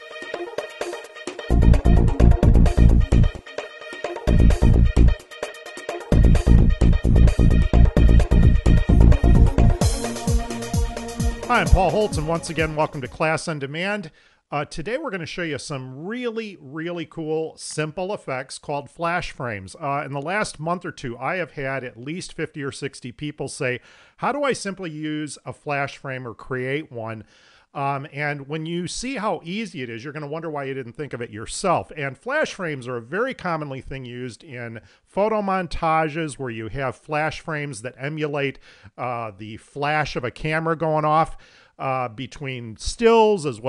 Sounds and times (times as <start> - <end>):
Speech: 11.5 - 43.6.